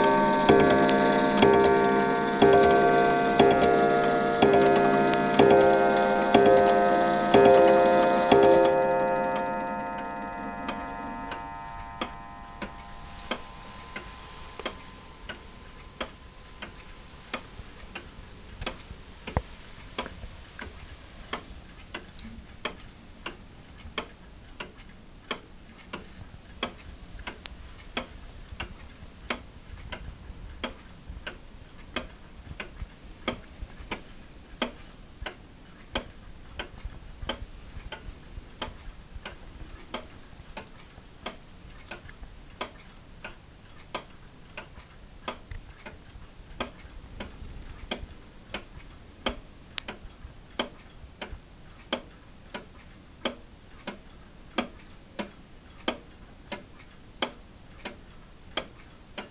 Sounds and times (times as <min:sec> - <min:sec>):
Tick-tock: 0:00.0 - 0:46.0, 0:46.6 - 0:59.3.